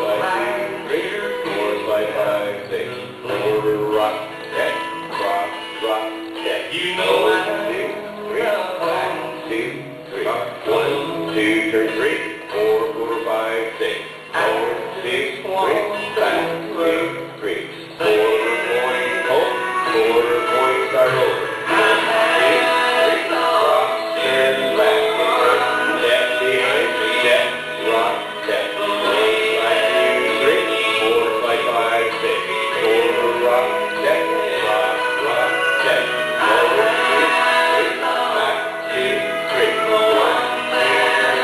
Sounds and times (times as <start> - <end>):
Dance music: 0.0 - 41.4.